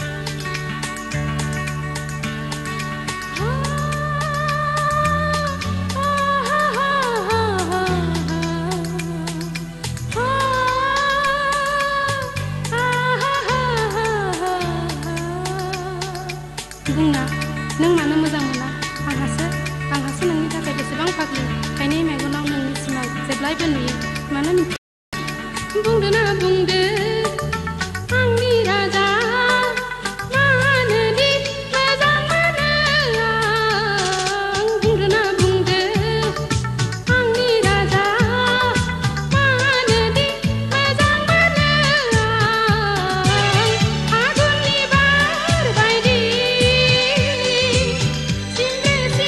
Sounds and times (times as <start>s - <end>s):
Music: 0.0s - 49.2s.